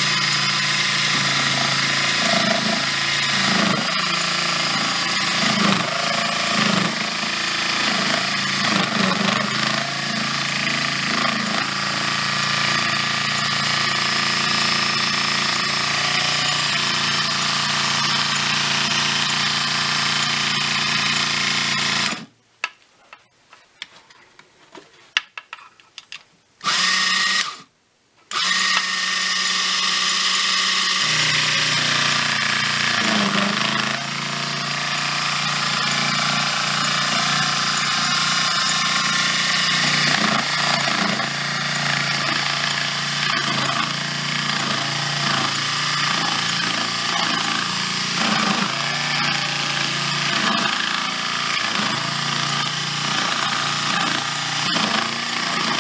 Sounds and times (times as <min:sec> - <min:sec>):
Drill: 0:00.0 - 0:22.3, 0:26.6 - 0:27.7, 0:28.3 - 0:55.8.